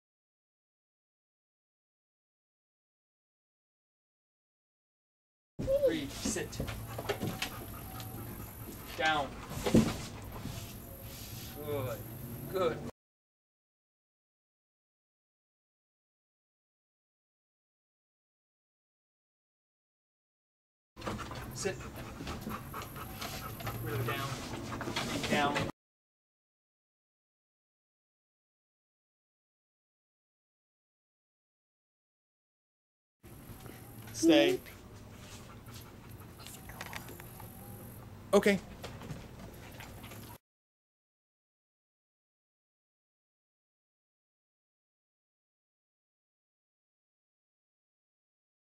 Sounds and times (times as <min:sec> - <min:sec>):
Speech: 0:05.6 - 0:06.7, 0:09.0 - 0:09.4, 0:21.6 - 0:21.8, 0:23.8 - 0:24.4, 0:25.3 - 0:25.7, 0:34.2 - 0:34.8, 0:38.4 - 0:38.6.